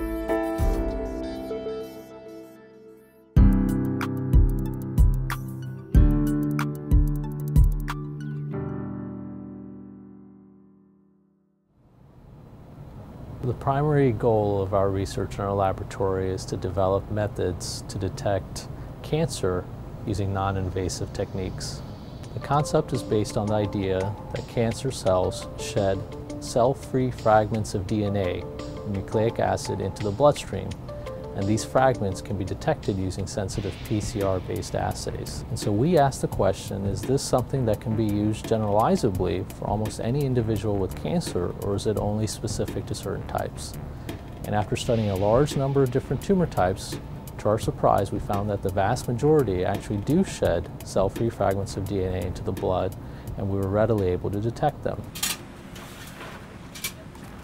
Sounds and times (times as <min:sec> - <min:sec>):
Music: 0:00.0 - 0:11.6, 0:21.0 - 0:55.0
Speech: 0:13.4 - 0:21.8, 0:22.4 - 0:30.8, 0:31.4 - 0:43.8, 0:44.5 - 0:55.1.